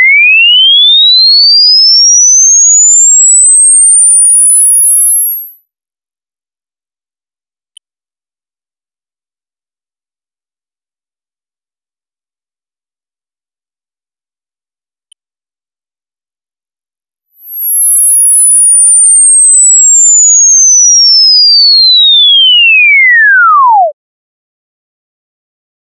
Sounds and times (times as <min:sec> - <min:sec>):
Chirp tone: 0:00.0 - 0:07.9, 0:15.1 - 0:24.0.